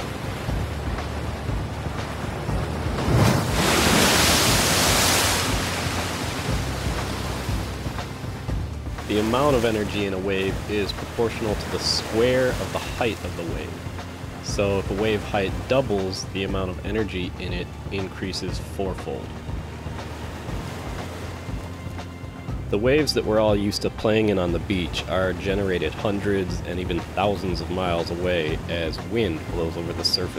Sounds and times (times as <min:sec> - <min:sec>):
Music: 0:00.0 - 0:30.3
Waves, surf: 0:00.0 - 0:30.3
Speech: 0:09.1 - 0:13.8, 0:14.4 - 0:19.3, 0:22.7 - 0:30.3.